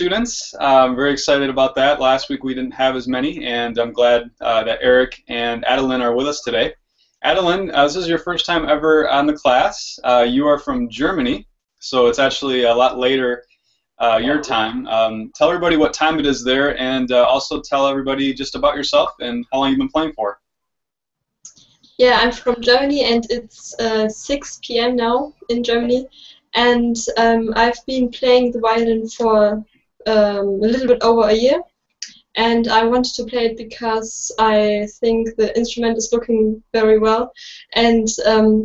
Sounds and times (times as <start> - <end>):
Speech: 0.0 - 13.4, 14.0 - 20.4, 22.0 - 38.6.